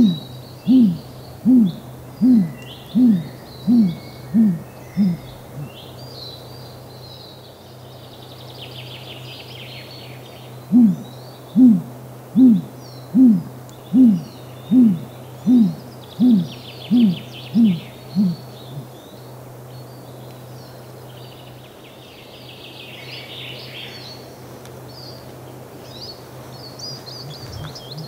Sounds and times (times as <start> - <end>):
Owl: 0.0 - 5.8, 10.7 - 19.0, 26.9 - 28.0
Chirp, tweet: 2.4 - 11.6, 12.8 - 24.3, 24.9 - 28.0.